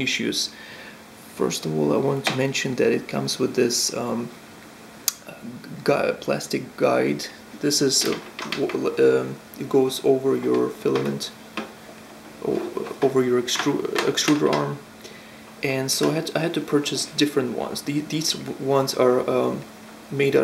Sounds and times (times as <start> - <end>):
Speech: 0.0 - 0.6, 1.3 - 4.3, 5.1 - 11.4, 12.4 - 14.9, 15.6 - 20.4.